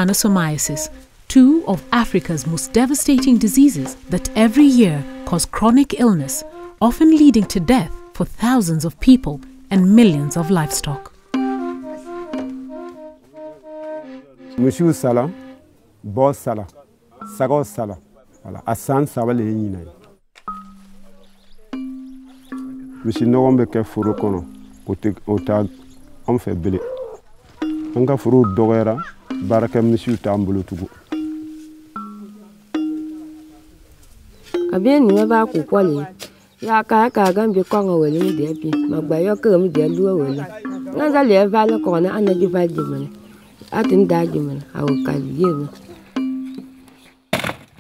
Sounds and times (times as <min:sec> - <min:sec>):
Speech: 0:00.0 - 0:11.1, 0:34.7 - 0:43.1, 0:43.7 - 0:45.8
Music: 0:00.0 - 0:15.8, 0:20.4 - 0:26.8, 0:27.6 - 0:47.3.